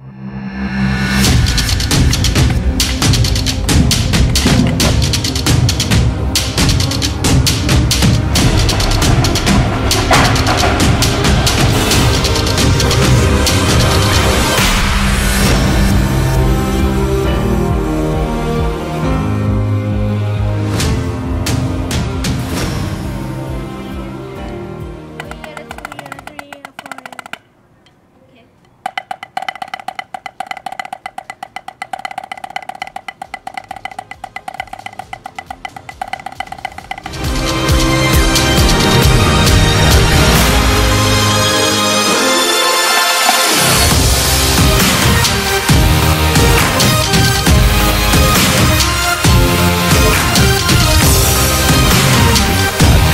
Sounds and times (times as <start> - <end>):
Snare drum: 1.4 - 6.0, 6.6 - 14.0, 28.9 - 37.2
Child speech, kid speaking: 25.2 - 27.2, 28.2 - 28.6.